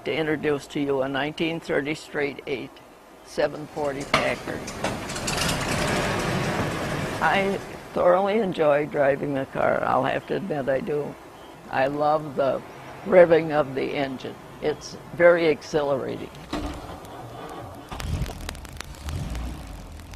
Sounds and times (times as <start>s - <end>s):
Speech: 0.0s - 4.8s, 7.2s - 16.4s.